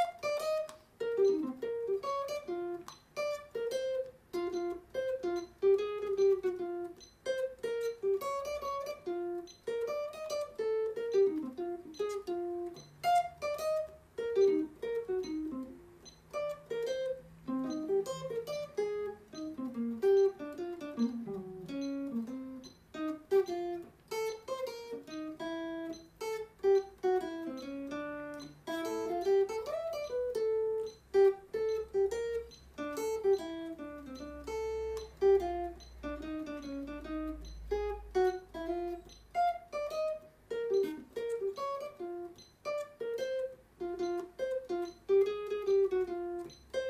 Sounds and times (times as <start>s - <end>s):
Guitar: 0.0s - 46.9s.